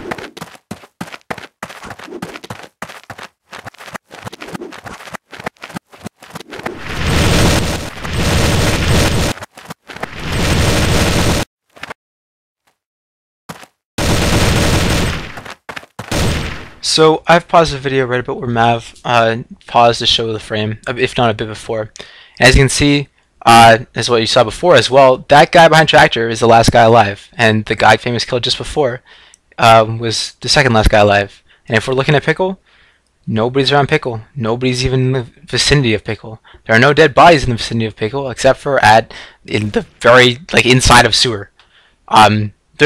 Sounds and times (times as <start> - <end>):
Speech: 16.8 - 32.6, 33.3 - 41.5, 42.1 - 42.8.